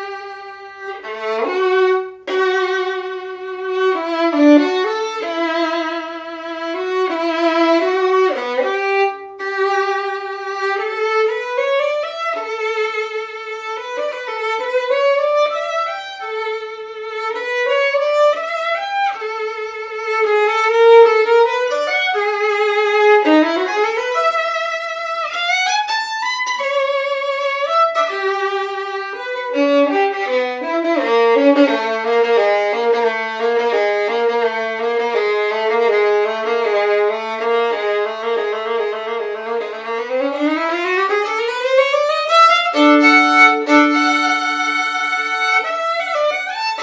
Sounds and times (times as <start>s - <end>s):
Violin, fiddle: 0.0s - 46.8s.